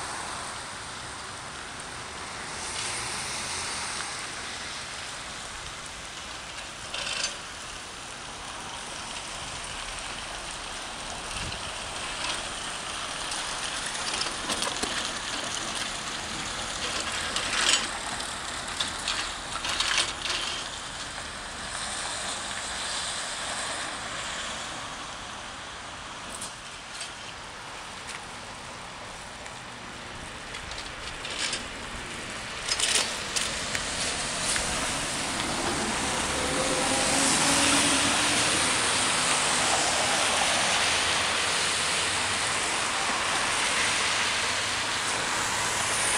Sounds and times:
Bus: 0.0 - 46.1
Rain on surface: 0.0 - 46.1.

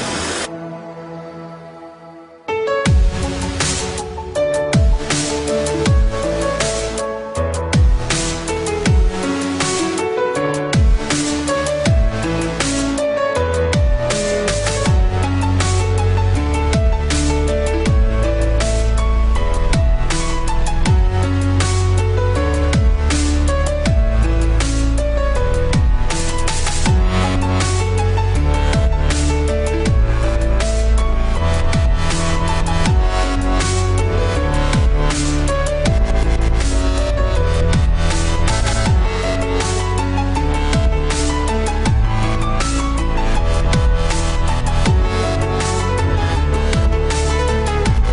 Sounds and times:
Music: 0.0 - 48.1.

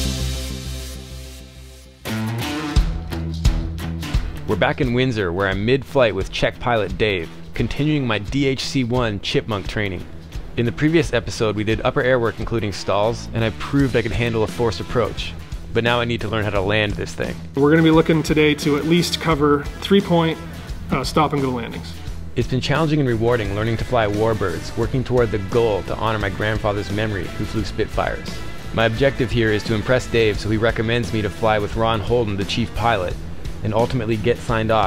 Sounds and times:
Music: 0.0 - 34.8
Speech: 4.5 - 34.8.

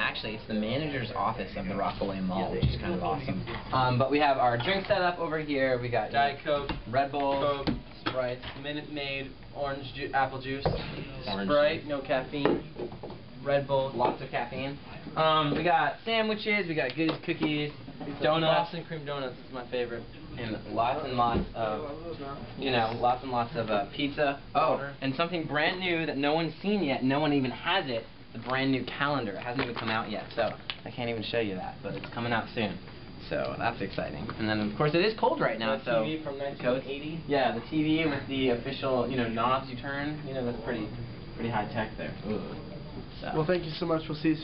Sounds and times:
Speech: 0.0 - 12.7, 13.4 - 44.4.

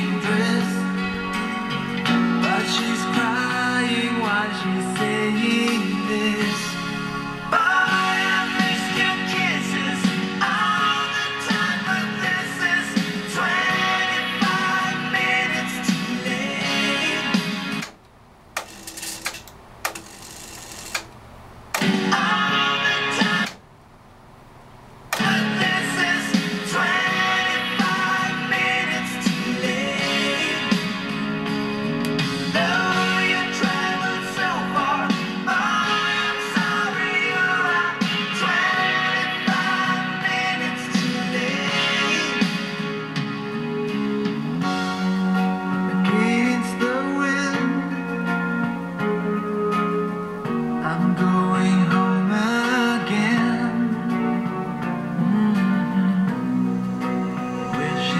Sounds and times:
Music: 0.0 - 18.0, 21.8 - 23.6, 25.2 - 58.1
Inside, small room: 0.0 - 58.1.

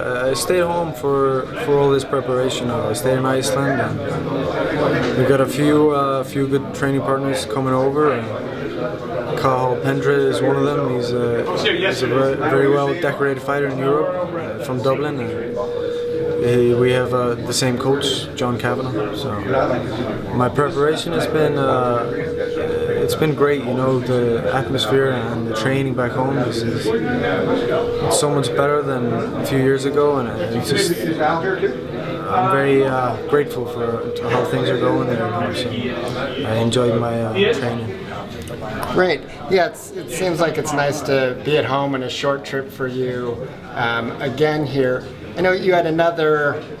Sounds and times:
Speech: 0.0 - 46.8.

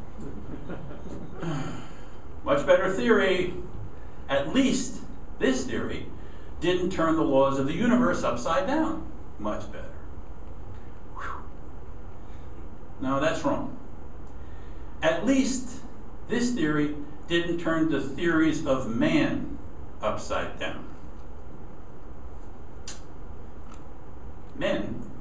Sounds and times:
Speech: 2.5 - 3.7, 4.3 - 10.0, 13.0 - 13.8, 15.0 - 20.9, 24.6 - 25.1.

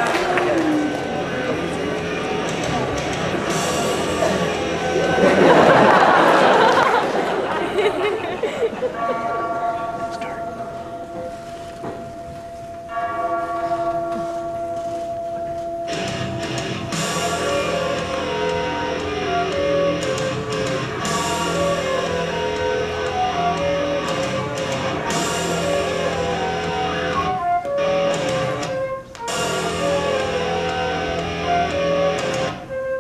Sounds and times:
Flute: 0.0 - 6.5, 14.2 - 33.0.

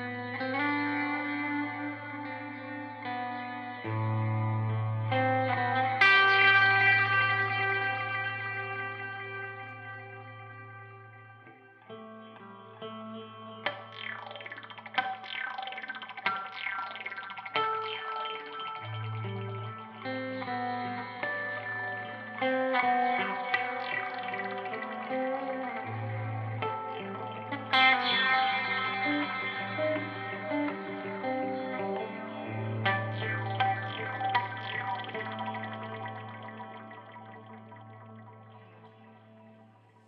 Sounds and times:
Effects unit: 0.0 - 40.0
Electric guitar: 0.0 - 40.0.

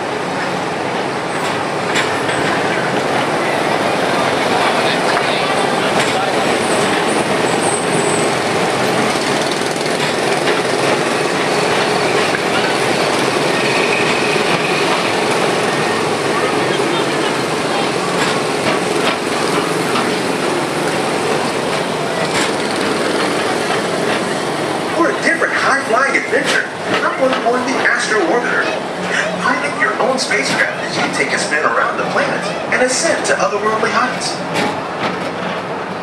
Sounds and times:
Train: 0.0 - 36.0
Speech: 4.1 - 6.8, 25.0 - 34.5.

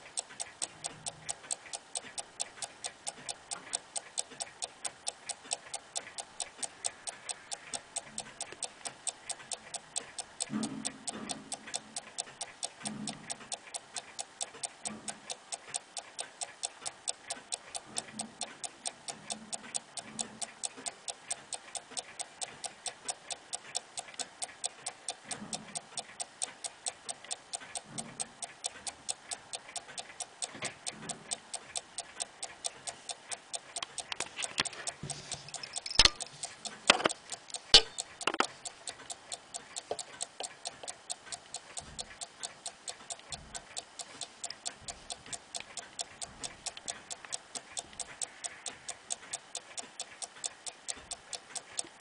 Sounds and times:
Tick-tock: 0.0 - 52.0.

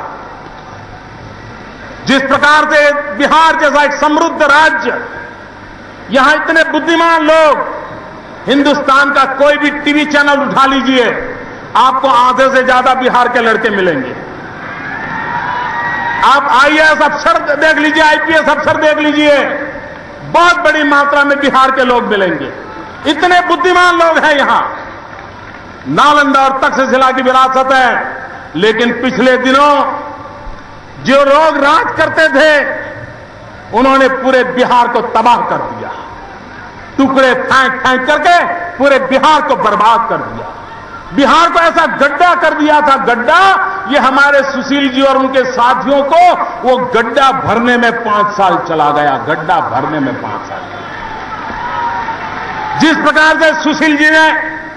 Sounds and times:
Narration, monologue: 0.0 - 14.6, 16.2 - 50.7, 52.8 - 54.7
Male speech, man speaking: 2.1 - 5.1, 6.1 - 7.7, 8.5 - 14.2, 16.2 - 19.7, 20.3 - 24.8, 25.9 - 30.1, 31.0 - 33.0, 33.7 - 36.1, 37.0 - 40.5, 41.2 - 50.7, 52.8 - 54.6.

